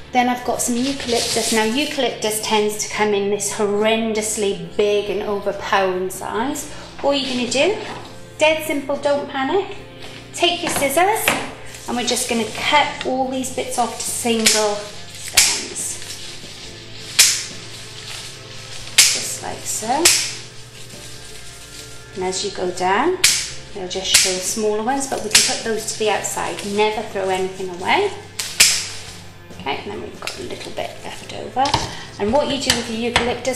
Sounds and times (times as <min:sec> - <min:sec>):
Music: 0:00.0 - 0:33.5
Speech: 0:00.2 - 0:07.8, 0:11.9 - 0:16.0, 0:22.2 - 0:23.2, 0:23.8 - 0:28.2, 0:29.6 - 0:33.5.